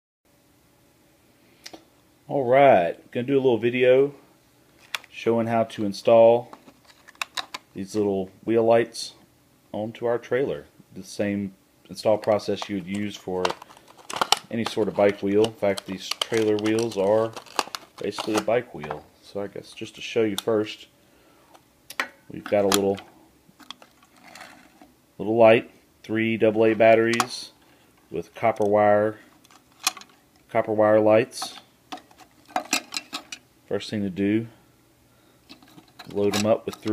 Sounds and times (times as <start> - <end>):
Speech: 2.3 - 4.2, 5.1 - 6.6, 7.8 - 13.6, 14.5 - 17.4, 18.0 - 20.9, 22.3 - 23.1, 25.2 - 29.3, 30.5 - 31.6, 33.7 - 34.6, 36.1 - 36.9.